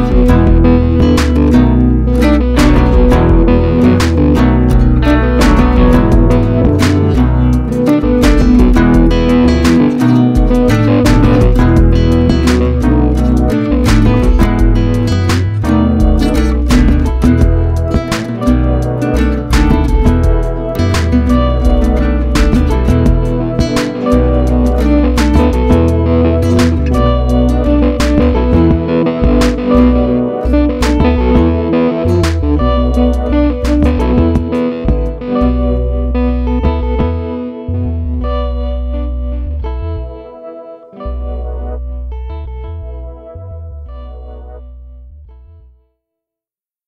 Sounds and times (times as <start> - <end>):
Music: 0.0 - 46.1.